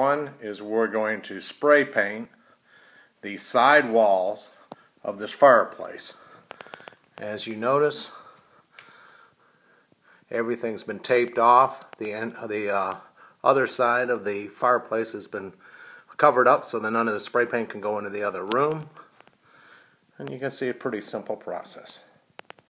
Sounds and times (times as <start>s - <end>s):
Speech: 0.0s - 2.4s, 3.2s - 6.2s, 7.2s - 8.2s, 10.3s - 15.6s, 16.2s - 19.1s, 20.2s - 22.2s.